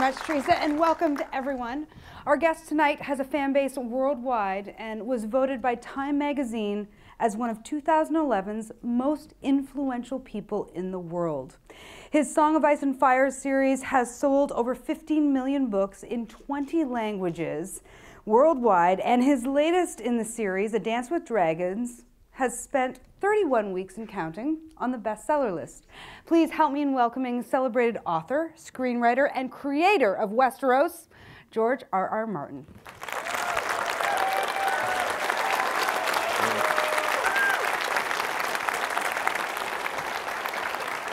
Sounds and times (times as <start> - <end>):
Speech: 12.2 - 32.7.